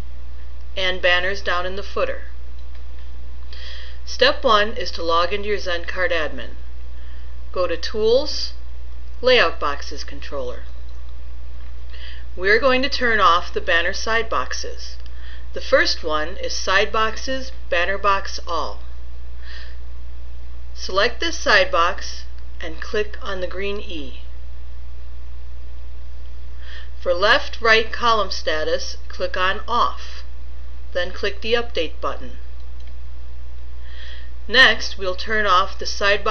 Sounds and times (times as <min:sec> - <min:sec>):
Narration, monologue: 0:00.0 - 0:36.3.